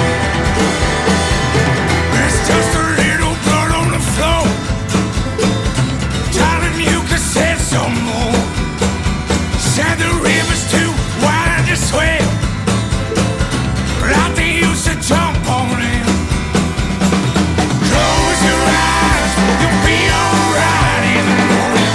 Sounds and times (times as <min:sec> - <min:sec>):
Exciting music: 0:00.0 - 0:21.9.